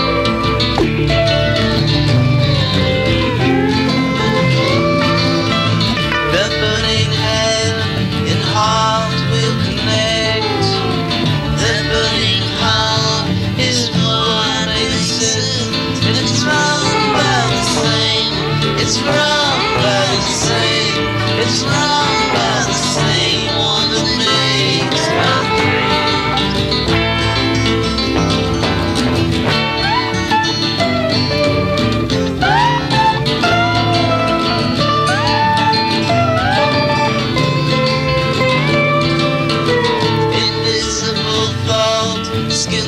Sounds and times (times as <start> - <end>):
Music: 0.0 - 42.8.